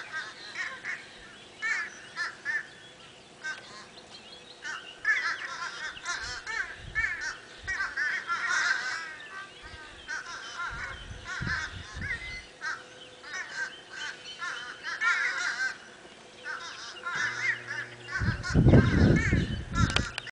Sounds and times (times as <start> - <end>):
Crow: 0.0 - 2.7, 3.4 - 3.9, 4.6 - 15.8, 16.4 - 20.3.